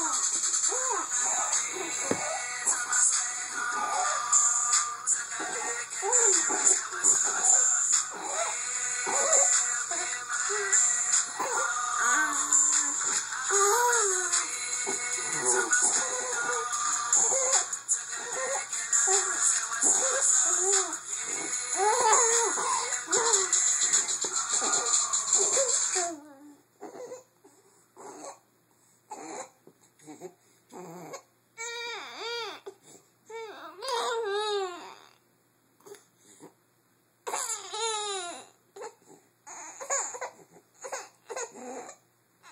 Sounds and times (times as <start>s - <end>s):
Baby cry, infant cry: 0.0s - 2.5s, 5.4s - 14.5s, 15.2s - 27.3s, 28.0s - 28.4s, 29.1s - 35.2s, 37.2s - 42.5s.